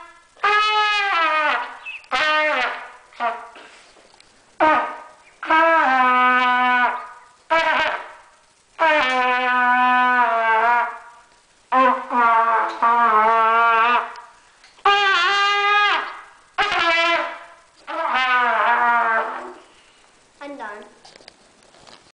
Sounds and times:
Trumpet: 0.0 - 3.9, 4.6 - 19.8
Speech: 20.4 - 21.0.

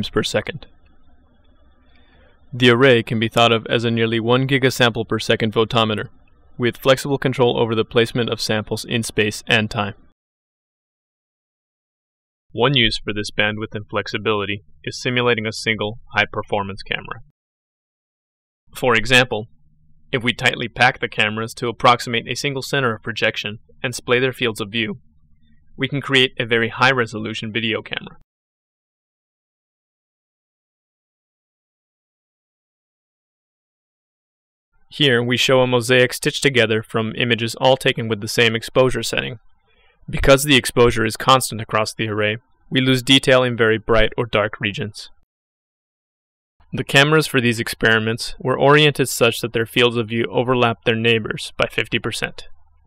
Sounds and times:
Speech: 0.0 - 0.7, 2.6 - 10.1, 12.6 - 17.3, 18.8 - 19.5, 20.2 - 25.0, 25.8 - 28.3, 35.0 - 39.4, 40.1 - 45.3, 46.8 - 52.5.

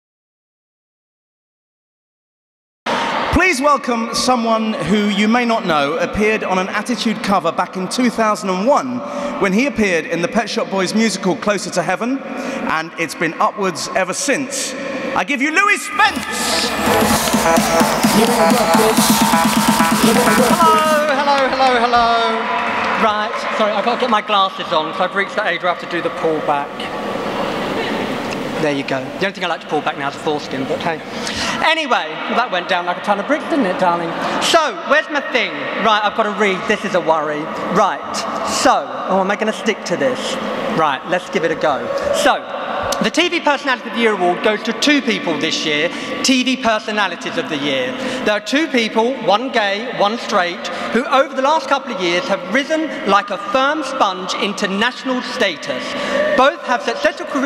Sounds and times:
Narration, monologue: 3.0 - 16.4, 21.0 - 26.8, 28.4 - 57.4
Male speech, man speaking: 3.3 - 16.7, 20.0 - 26.7, 28.6 - 57.4.

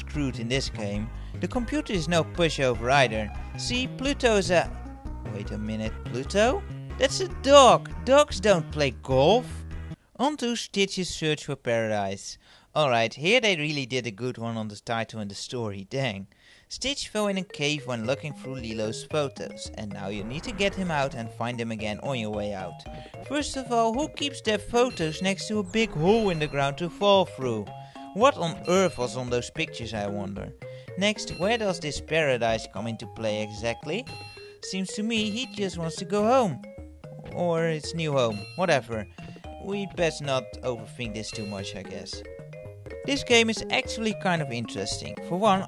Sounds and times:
Narration, monologue: 0.0 - 45.6.

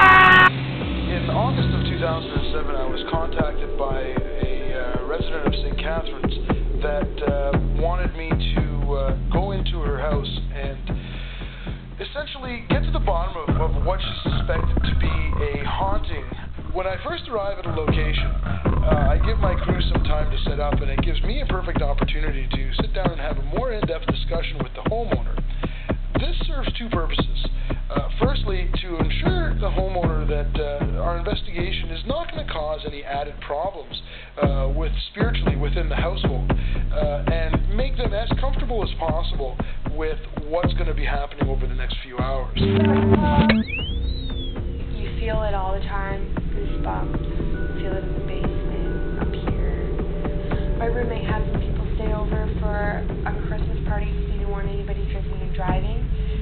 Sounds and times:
Music: 0.0 - 56.4
Speech: 1.1 - 11.0, 12.0 - 25.5, 26.2 - 43.6, 45.0 - 49.9, 50.8 - 56.4.

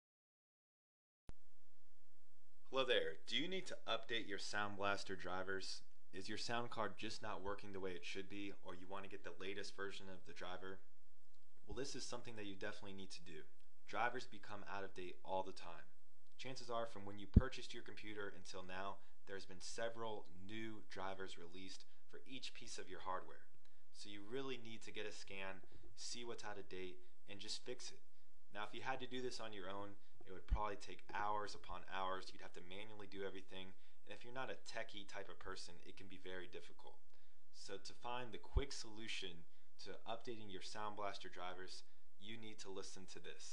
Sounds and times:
Speech: 2.7 - 10.9, 11.7 - 37.0, 37.6 - 43.5.

